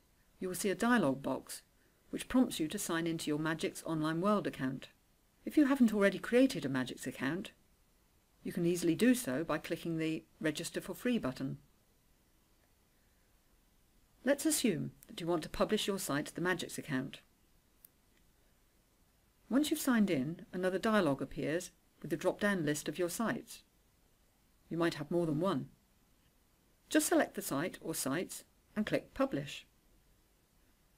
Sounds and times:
Narration, monologue: 0:00.0 - 0:29.9.

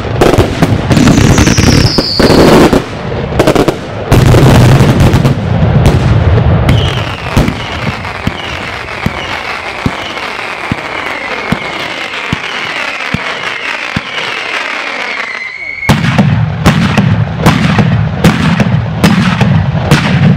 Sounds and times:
Fireworks: 0:00.0 - 0:20.3.

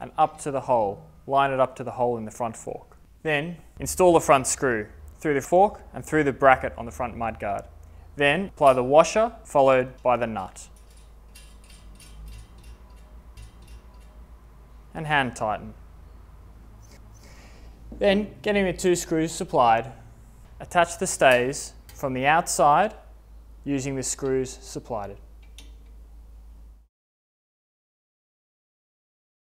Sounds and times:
Speech: 0:00.0 - 0:10.7, 0:15.0 - 0:15.8, 0:18.0 - 0:20.0, 0:20.6 - 0:23.1, 0:23.7 - 0:25.2.

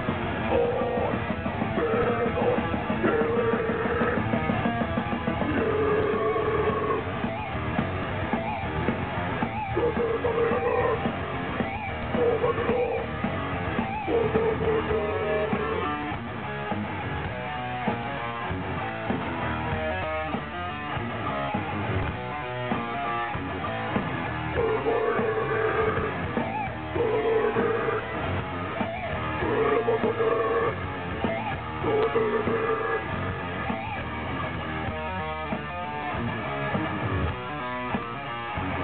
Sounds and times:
Music: 0:00.0 - 0:38.8.

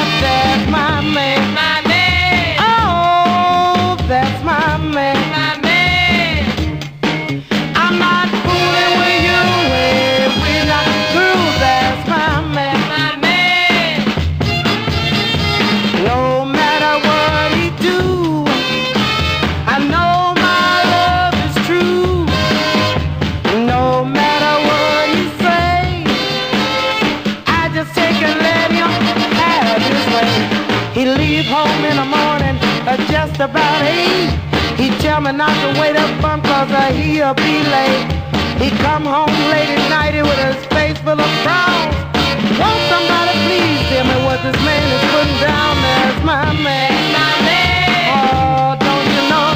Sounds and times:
Reggae: 0:00.0 - 0:49.5
Rhythm and blues: 0:00.0 - 0:49.5.

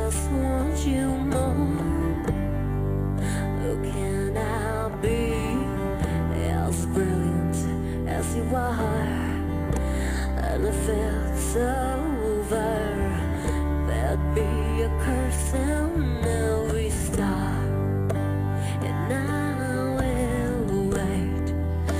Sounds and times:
Music: 0:00.0 - 0:21.9.

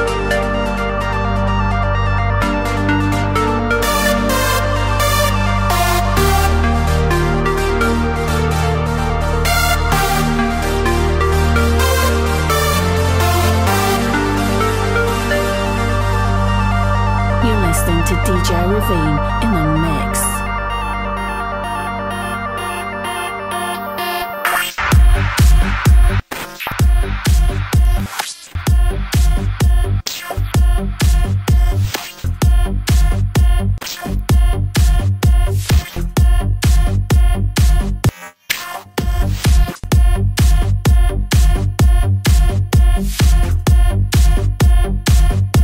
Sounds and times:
Electronic dance music: 0:00.0 - 0:45.6
House music: 0:00.0 - 0:45.6.

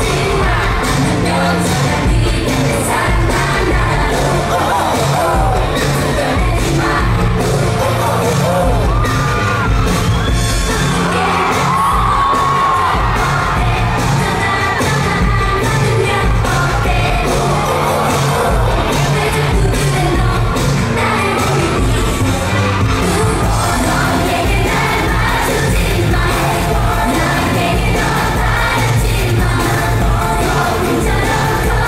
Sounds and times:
Music: 0:00.0 - 0:31.8
Singing: 0:00.0 - 0:31.8.

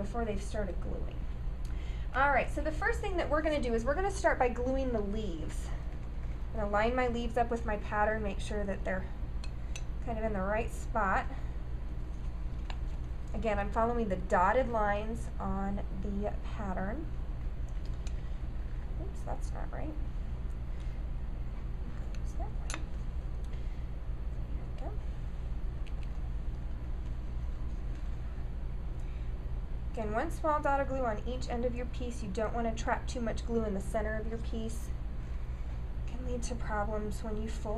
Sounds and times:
Speech: 0:00.0 - 0:01.3, 0:02.1 - 0:05.8, 0:06.6 - 0:09.2, 0:10.0 - 0:11.4, 0:13.3 - 0:17.1, 0:19.0 - 0:20.1, 0:24.7 - 0:25.1, 0:30.0 - 0:35.0, 0:36.1 - 0:37.7
Inside, small room: 0:00.0 - 0:37.7.

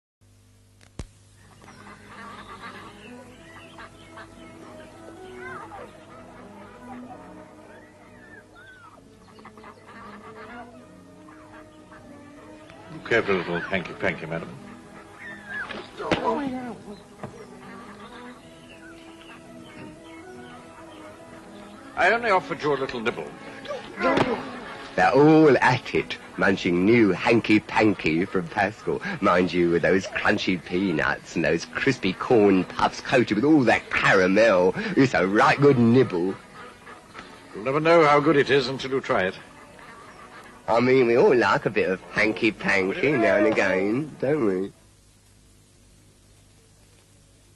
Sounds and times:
Outside, urban or manmade: 0:00.2 - 0:47.5
Television: 0:00.3 - 0:47.5
Music: 0:01.3 - 0:47.5
Duck: 0:01.5 - 0:12.5, 0:13.2 - 0:21.1, 0:34.0 - 0:43.5.

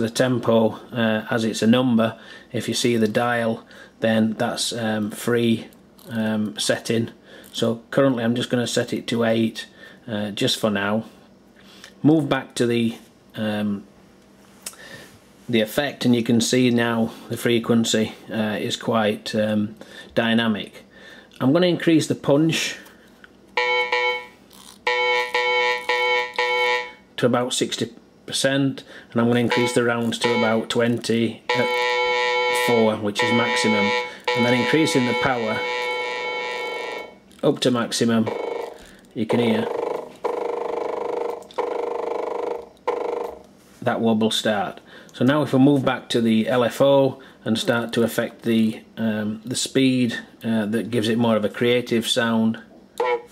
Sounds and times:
Speech: 0:00.0 - 0:11.2, 0:12.0 - 0:13.9, 0:15.5 - 0:20.8, 0:21.4 - 0:22.9, 0:27.2 - 0:31.8, 0:32.6 - 0:35.6, 0:37.4 - 0:38.3, 0:39.2 - 0:39.7, 0:43.8 - 0:52.7.

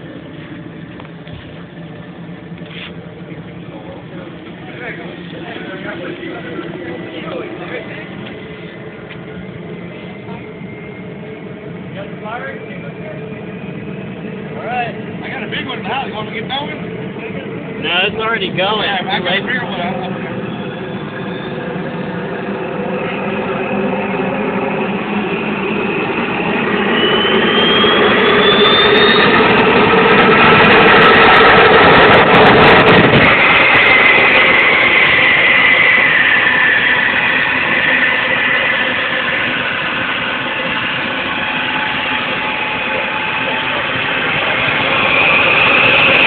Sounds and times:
Aircraft: 0:00.0 - 0:46.2
Engine: 0:00.0 - 0:46.2
Speech: 0:03.1 - 0:08.2, 0:11.9 - 0:13.4, 0:14.6 - 0:20.4.

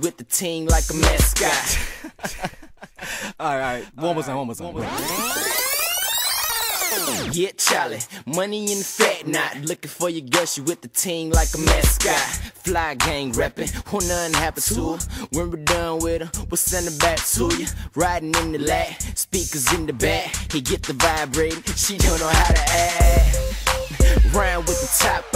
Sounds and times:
Pop music: 0:00.0 - 0:01.9, 0:06.8 - 0:15.0, 0:15.6 - 0:25.3.

